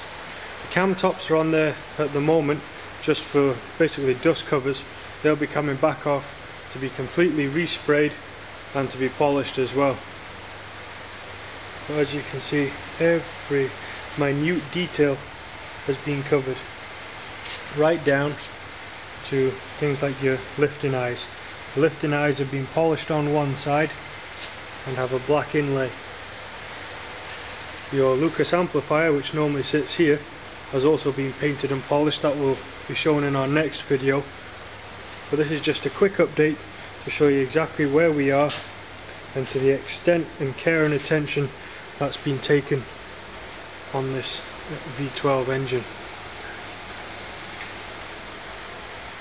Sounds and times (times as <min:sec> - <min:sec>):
Speech: 0:00.7 - 0:10.0, 0:11.9 - 0:15.2, 0:15.9 - 0:16.7, 0:17.7 - 0:18.5, 0:19.2 - 0:24.0, 0:24.8 - 0:26.0, 0:27.9 - 0:34.3, 0:35.3 - 0:38.7, 0:39.4 - 0:42.9, 0:43.9 - 0:45.9.